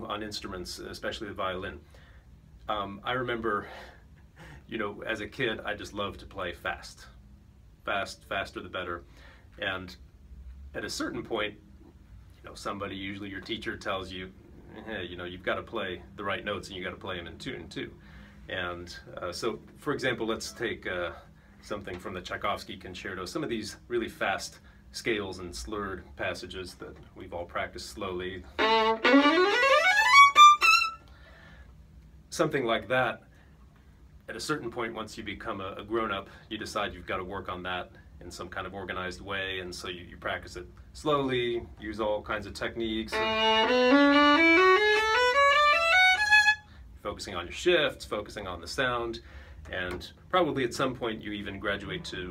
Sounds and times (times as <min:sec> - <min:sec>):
Speech: 0:00.0 - 0:01.8, 0:02.6 - 0:03.8, 0:04.6 - 0:07.2, 0:07.8 - 0:10.1, 0:10.7 - 0:11.6, 0:12.4 - 0:28.6, 0:32.3 - 0:33.3, 0:34.2 - 0:43.2, 0:47.0 - 0:52.3.